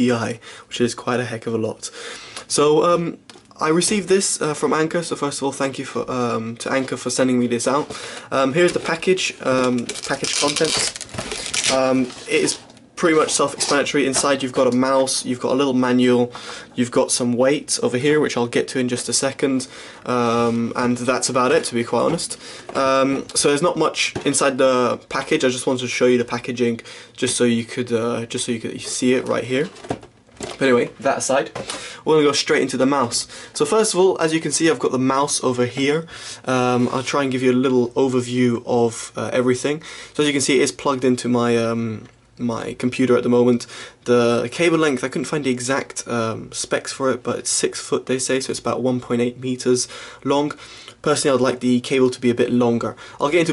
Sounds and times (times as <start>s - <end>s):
Speech: 0.0s - 11.0s, 11.6s - 29.8s, 30.5s - 53.5s.